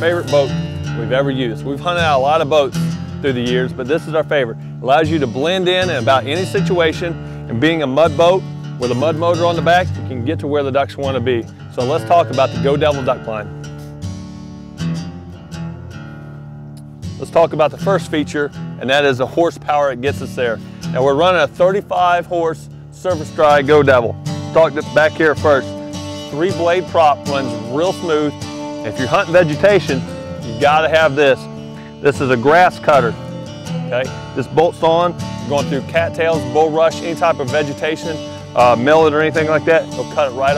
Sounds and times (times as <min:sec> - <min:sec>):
Speech: 0:00.0 - 0:13.5, 0:17.2 - 0:25.7, 0:26.3 - 0:33.2, 0:33.9 - 0:40.5
Music: 0:00.0 - 0:40.5.